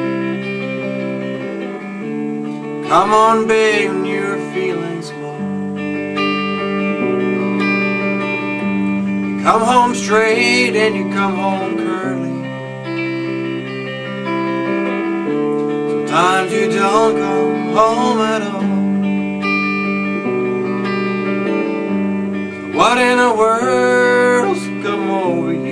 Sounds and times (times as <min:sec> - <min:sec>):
Music: 0:00.0 - 0:25.7.